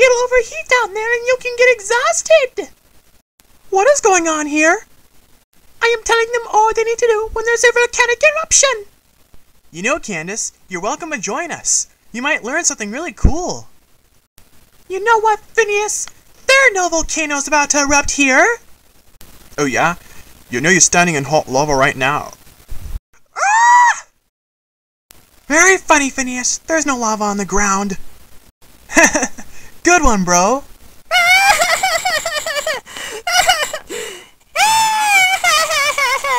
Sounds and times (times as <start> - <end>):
Speech: 0.0 - 2.7, 3.7 - 4.8, 5.8 - 8.9, 9.8 - 13.7, 14.9 - 18.6, 19.6 - 22.4, 25.5 - 28.0, 29.8 - 30.7.